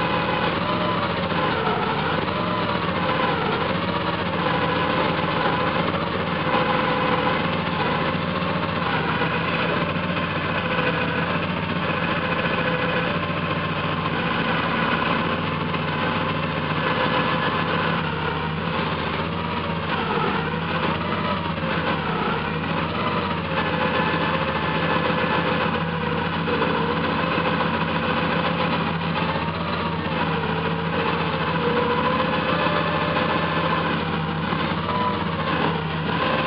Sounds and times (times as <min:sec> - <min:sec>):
Car: 0:00.0 - 0:36.4
Vibration: 0:00.0 - 0:36.4.